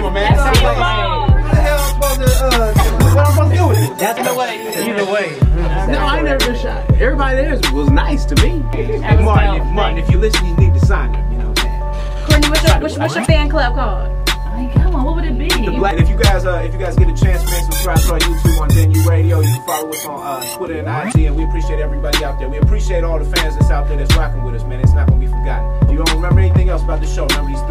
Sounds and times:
Music: 0:00.0 - 0:27.7.

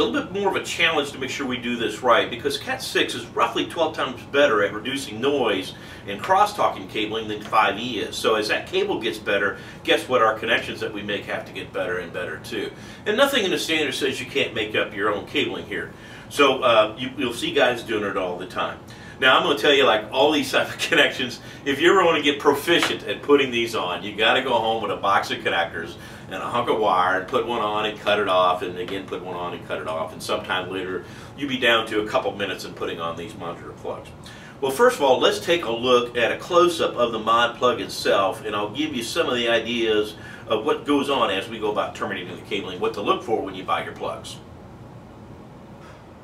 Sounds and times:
Speech: 0:00.0 - 0:44.5.

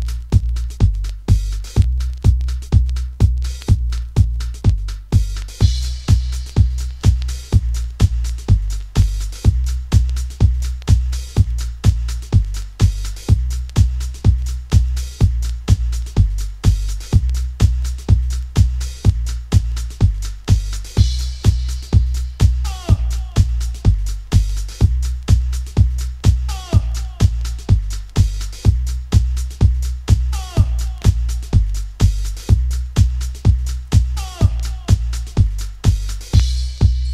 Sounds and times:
Music: 0:00.0 - 0:37.1.

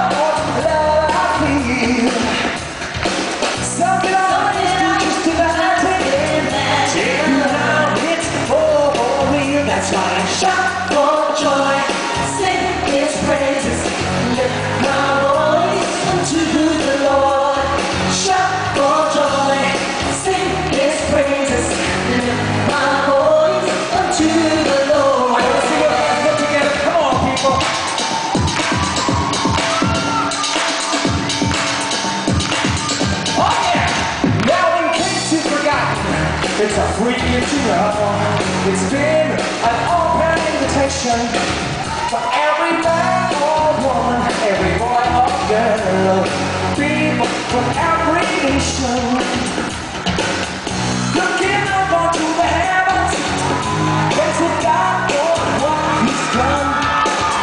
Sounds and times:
Music: 0:00.0 - 0:57.4.

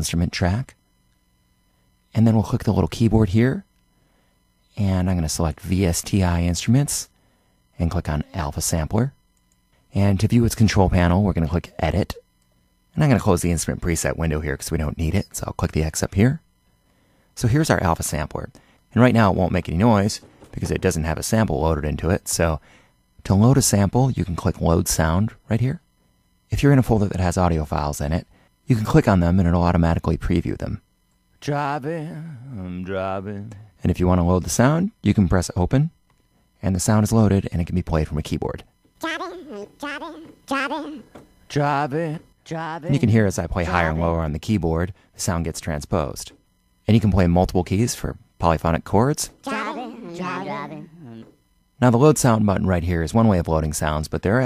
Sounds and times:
Speech: 0:00.0 - 0:00.8, 0:02.1 - 0:03.7, 0:04.8 - 0:07.1, 0:07.8 - 0:09.2, 0:09.9 - 0:12.2, 0:13.0 - 0:16.4, 0:17.4 - 0:22.6, 0:23.2 - 0:25.8, 0:26.5 - 0:30.8, 0:31.4 - 0:35.9, 0:36.6 - 0:54.4.

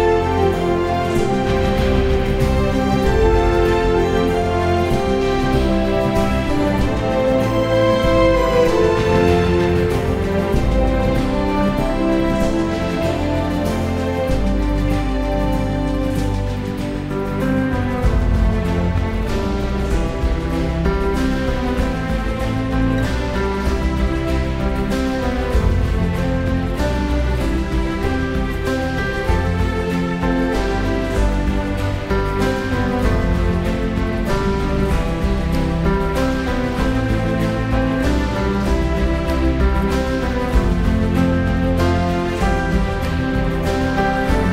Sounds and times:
Theme music: 0:00.0 - 0:44.5.

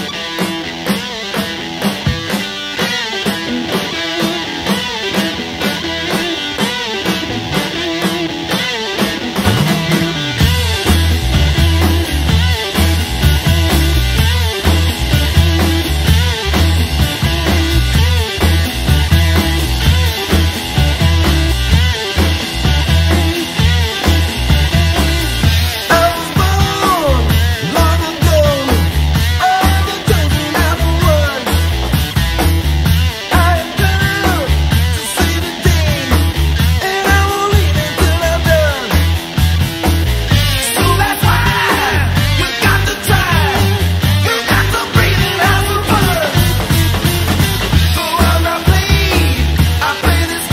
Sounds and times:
Punk rock: 0:00.0 - 0:50.5.

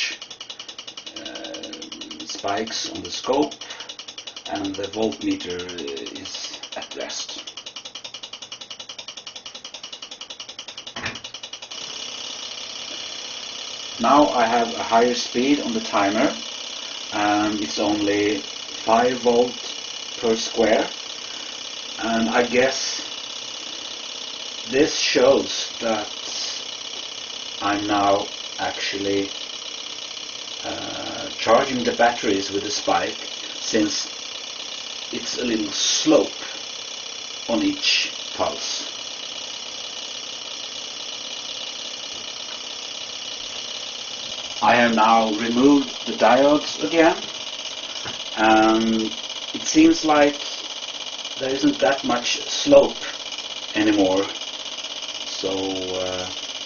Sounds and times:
Speech: 0:01.2 - 0:03.6, 0:04.5 - 0:07.4, 0:14.0 - 0:16.4, 0:17.2 - 0:19.6, 0:20.2 - 0:20.9, 0:22.0 - 0:23.0, 0:24.7 - 0:26.6, 0:27.6 - 0:29.3, 0:30.7 - 0:34.1, 0:35.2 - 0:36.5, 0:37.5 - 0:38.9, 0:44.6 - 0:47.3, 0:48.4 - 0:50.4, 0:51.4 - 0:53.2, 0:53.8 - 0:54.3, 0:55.3 - 0:56.4.

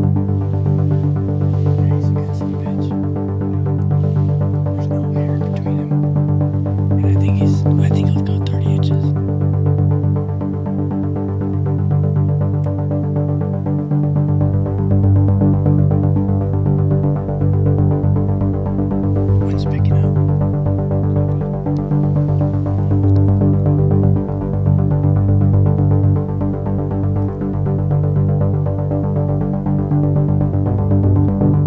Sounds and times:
Music: 0:00.0 - 0:31.6.

